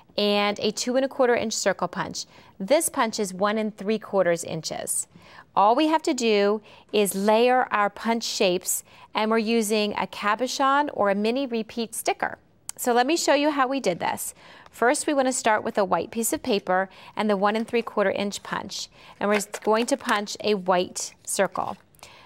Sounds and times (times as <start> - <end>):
Speech: 0.2 - 21.8.